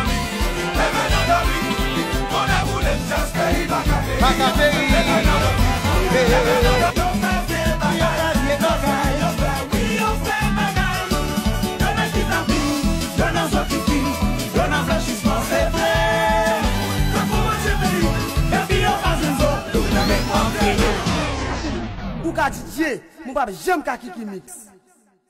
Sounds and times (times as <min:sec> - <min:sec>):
Salsa music: 0:00.0 - 0:21.8
Speech: 0:21.7 - 0:24.8.